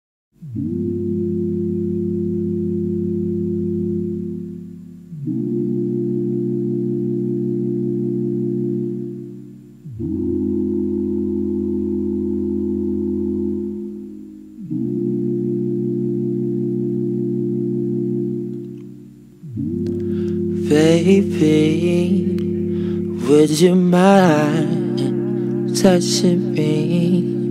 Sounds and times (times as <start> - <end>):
Music: 0.4 - 27.5.